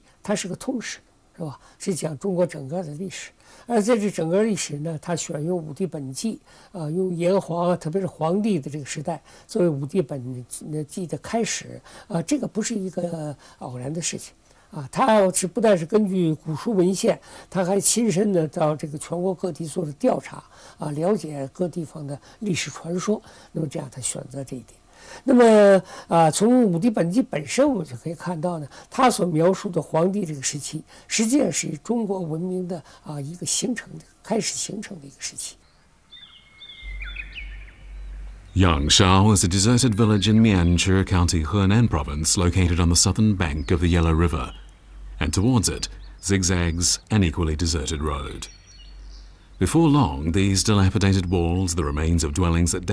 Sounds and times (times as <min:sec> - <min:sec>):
Outside, rural or natural: 0:00.1 - 0:52.9
Speech: 0:00.2 - 0:35.6, 0:38.6 - 0:44.6, 0:45.2 - 0:48.5, 0:49.6 - 0:52.9.